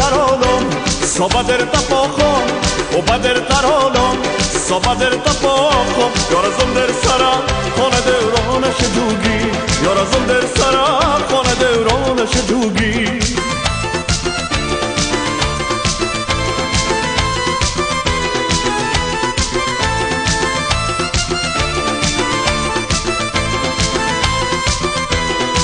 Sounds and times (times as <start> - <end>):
Happy music: 0.0 - 25.6.